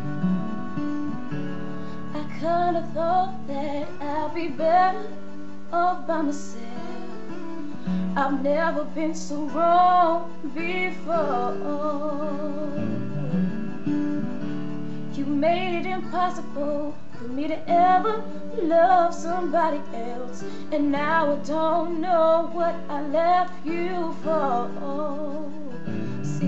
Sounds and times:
Music: 0.0 - 26.4
Female singing: 2.1 - 7.4, 8.2 - 12.9, 15.1 - 26.4.

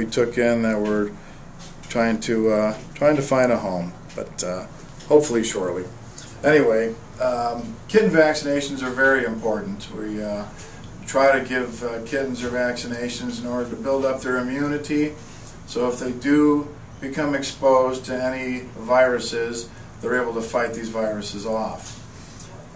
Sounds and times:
Speech: 0.0 - 1.2, 1.8 - 22.0.

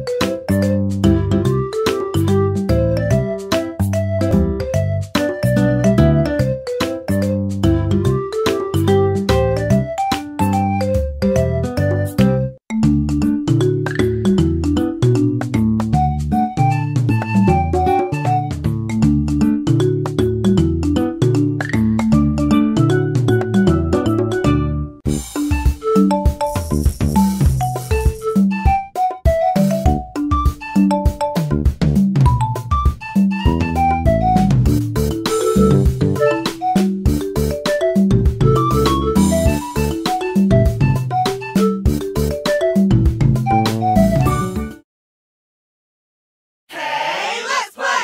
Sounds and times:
Funny music: 0.0 - 44.8.

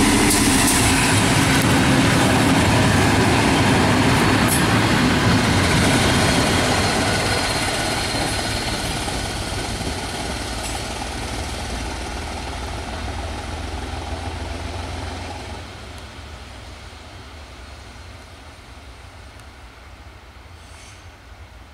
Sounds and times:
Railroad car, train wagon: 0.0 - 21.7
Train: 0.0 - 21.7.

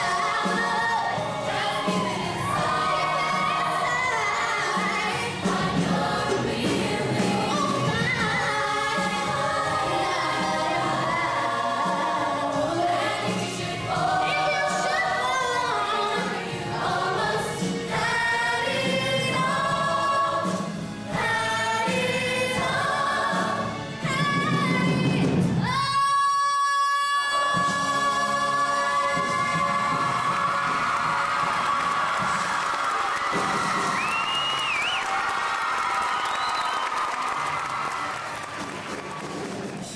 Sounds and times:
Choir: 0.0 - 34.0
Gospel music: 0.0 - 39.9.

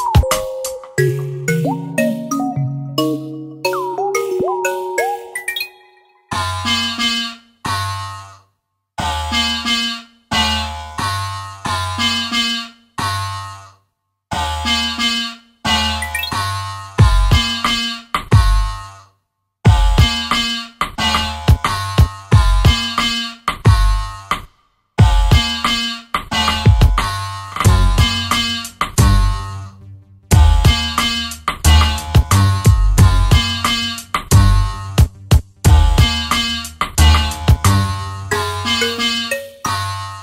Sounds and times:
Drum machine: 0.0 - 5.4, 17.0 - 17.6, 19.7 - 20.3, 21.4 - 23.0, 23.7 - 24.1, 25.0 - 29.4, 30.3 - 37.8.

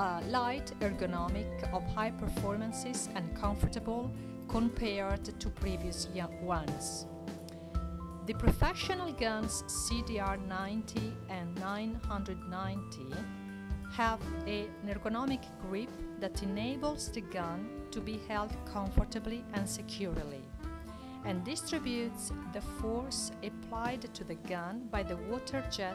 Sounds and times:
Speech: 0.0 - 7.1, 8.3 - 13.3, 14.0 - 20.5, 21.3 - 25.9
Music: 0.0 - 25.9.

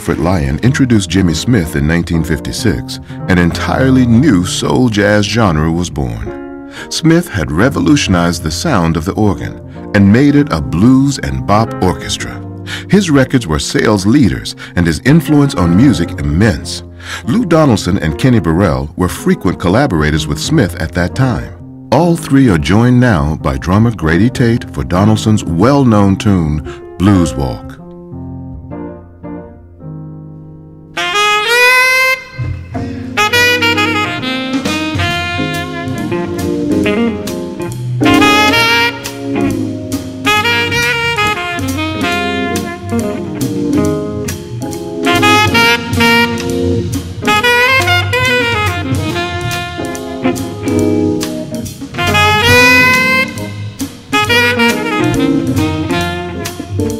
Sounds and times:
Speech: 0.0 - 27.8
Blues: 0.0 - 56.9.

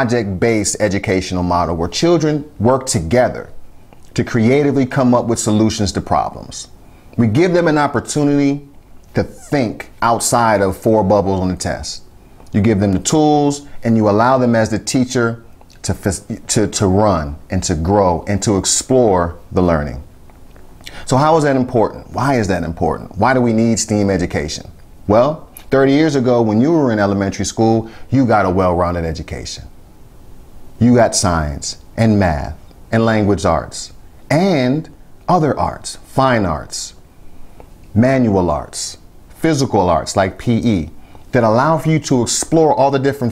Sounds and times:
Speech: 0.0 - 20.1, 20.9 - 29.8, 30.8 - 37.0, 37.9 - 43.3.

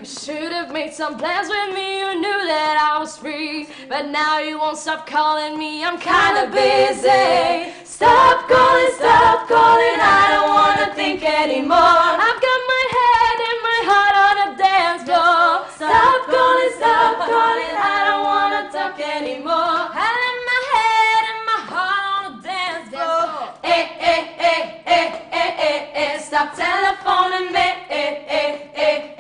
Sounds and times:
Female singing: 0.0 - 23.8.

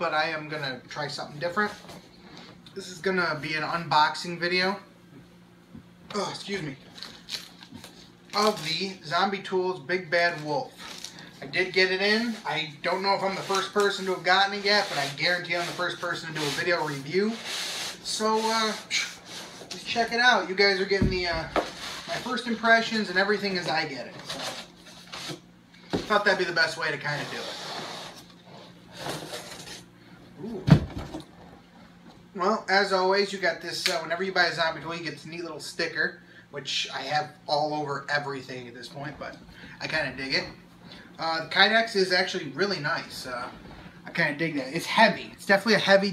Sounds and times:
Speech: 0.0 - 1.9, 2.7 - 4.9, 6.1 - 6.8, 8.3 - 10.7, 11.4 - 24.4, 26.0 - 27.5, 32.3 - 40.6, 41.2 - 46.1.

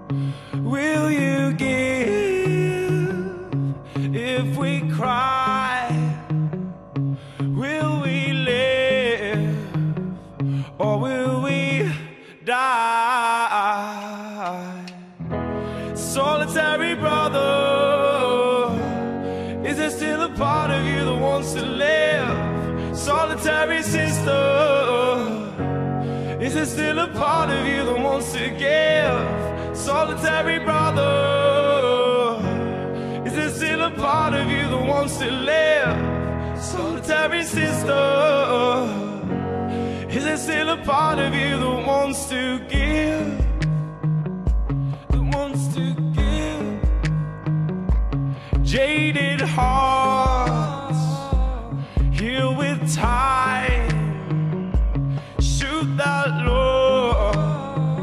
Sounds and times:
Music: 0.0 - 14.1, 14.9 - 58.0.

